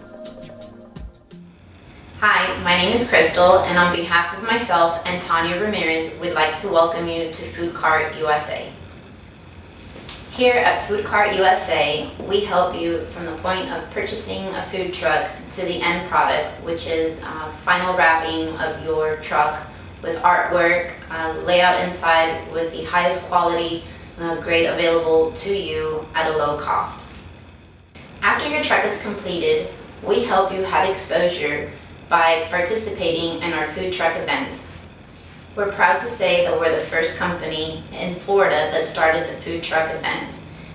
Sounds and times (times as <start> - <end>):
Speech: 2.2 - 8.8, 10.3 - 27.1, 28.2 - 34.8, 35.6 - 40.4.